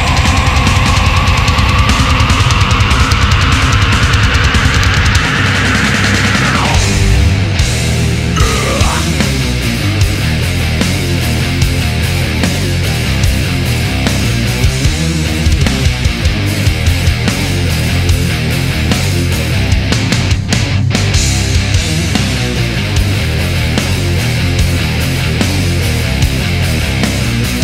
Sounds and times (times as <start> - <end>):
Music: 0.0 - 27.6.